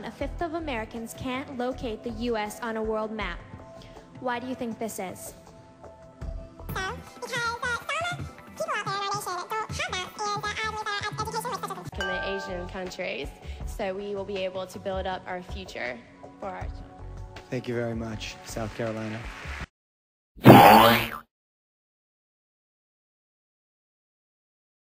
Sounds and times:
Music: 0.0s - 19.7s.

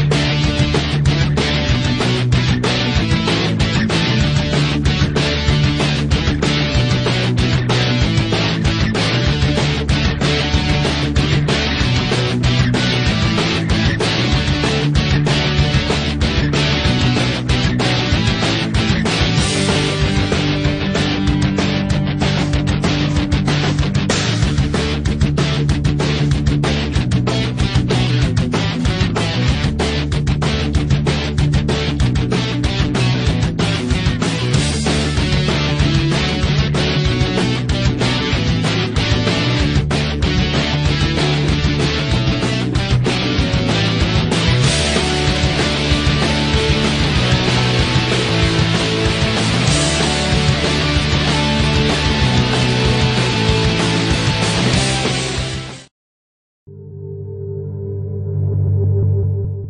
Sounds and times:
Music: 0.0s - 55.9s, 56.7s - 59.7s.

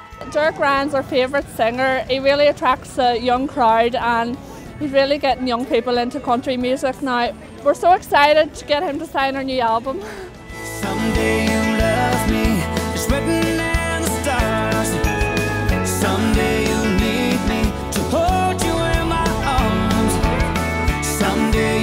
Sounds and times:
Music: 0.0s - 21.8s
Speech: 0.2s - 10.0s.

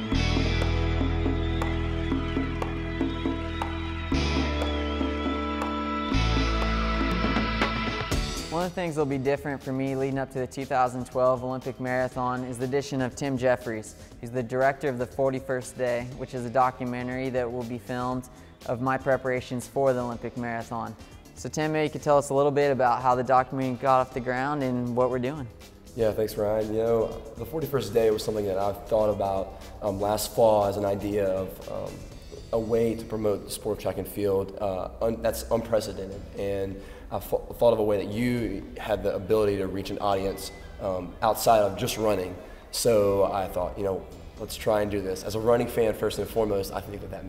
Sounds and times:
Music: 0.0s - 47.2s
Speech: 8.5s - 32.0s, 32.6s - 47.2s.

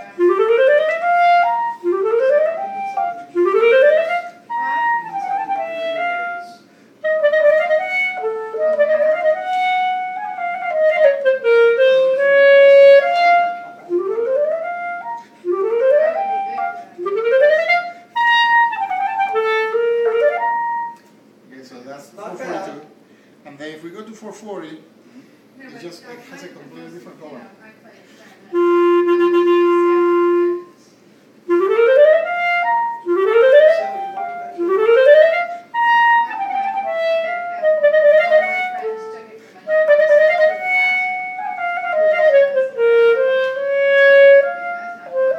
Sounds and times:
Clarinet: 0.0s - 21.2s, 28.5s - 45.3s.

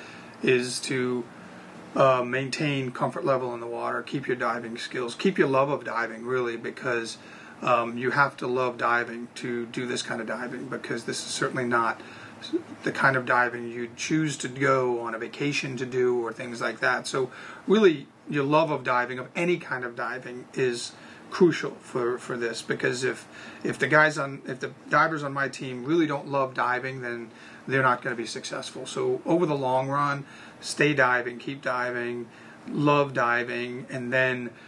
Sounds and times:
Speech: 0.0s - 1.3s, 2.0s - 34.6s
Inside, small room: 0.0s - 34.6s.

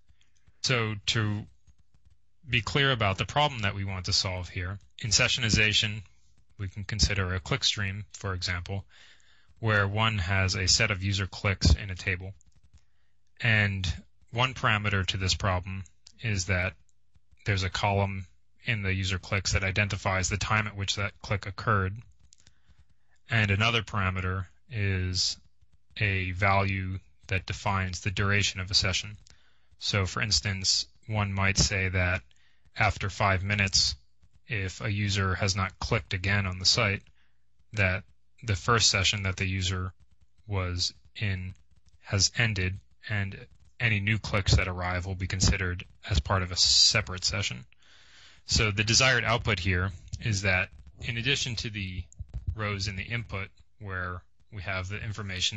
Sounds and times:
Speech: 0.6s - 1.5s, 2.4s - 8.9s, 9.6s - 12.4s, 13.4s - 16.8s, 17.4s - 22.0s, 23.2s - 25.4s, 26.0s - 37.1s, 37.7s - 47.7s, 48.4s - 55.5s.

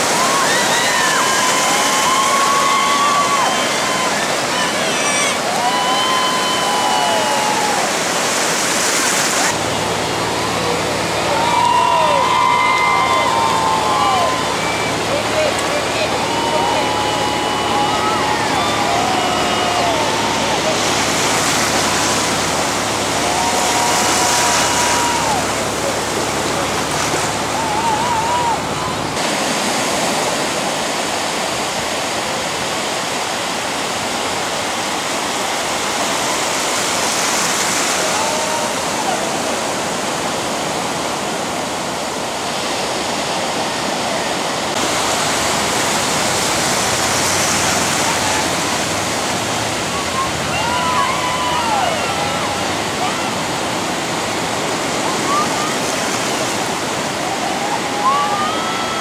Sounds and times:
Waves, surf: 0.0s - 59.0s.

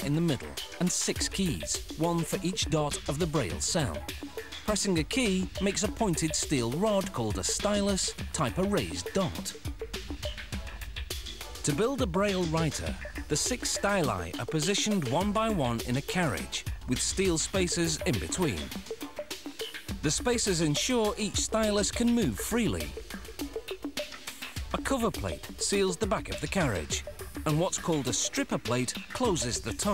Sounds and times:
Speech: 0.0s - 4.1s, 4.7s - 9.6s, 11.6s - 18.8s, 20.0s - 23.0s, 24.7s - 29.9s
Music: 0.0s - 29.9s.

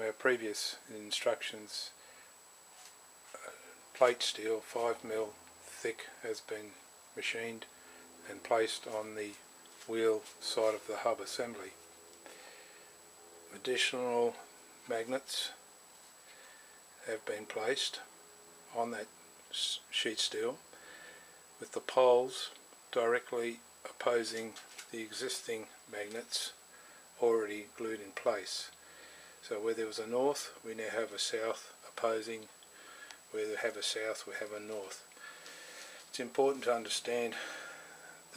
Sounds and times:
Speech: 0.0s - 2.0s, 3.4s - 11.8s, 13.5s - 15.6s, 17.0s - 18.1s, 18.7s - 20.6s, 21.6s - 26.6s, 27.2s - 28.8s, 29.4s - 32.5s, 33.3s - 35.1s, 36.1s - 37.6s.

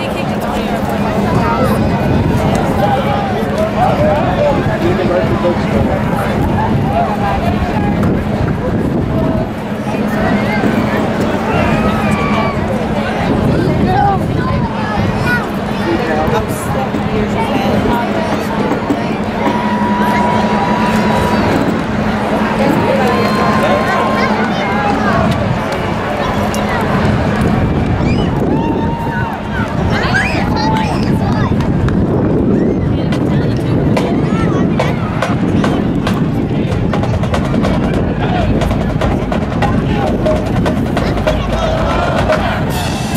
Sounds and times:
Speech: 0.0s - 28.4s, 29.0s - 43.1s.

